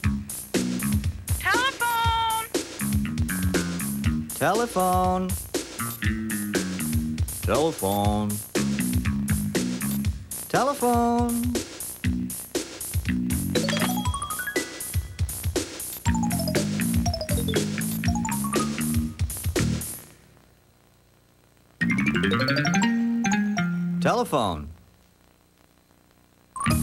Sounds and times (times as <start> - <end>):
Music: 0.0 - 20.2, 21.8 - 24.3, 26.6 - 26.8
Speech: 1.4 - 2.5, 4.4 - 5.4, 7.4 - 8.4, 10.5 - 11.6, 24.0 - 24.8.